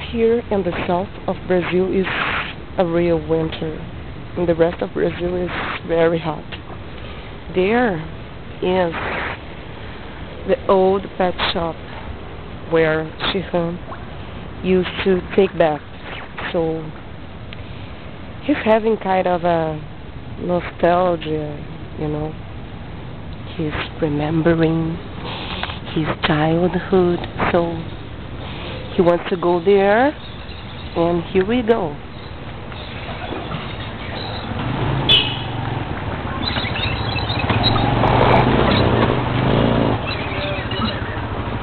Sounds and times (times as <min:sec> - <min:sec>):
Speech: 0:00.0 - 0:02.2, 0:02.8 - 0:03.8, 0:04.4 - 0:06.5, 0:07.5 - 0:09.0, 0:10.5 - 0:11.8, 0:12.7 - 0:13.8, 0:14.6 - 0:15.8, 0:16.4 - 0:17.0, 0:18.4 - 0:22.4, 0:23.5 - 0:25.0, 0:25.9 - 0:27.9, 0:29.0 - 0:30.2, 0:31.0 - 0:32.0, 0:40.3 - 0:41.2
Outside, urban or manmade: 0:00.0 - 0:41.6.